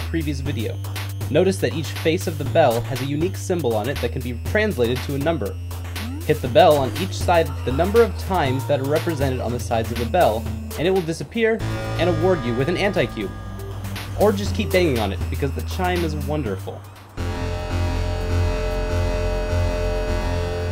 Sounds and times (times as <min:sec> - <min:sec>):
Speech: 0:00.0 - 0:13.3, 0:14.2 - 0:16.8
Music: 0:00.0 - 0:20.7.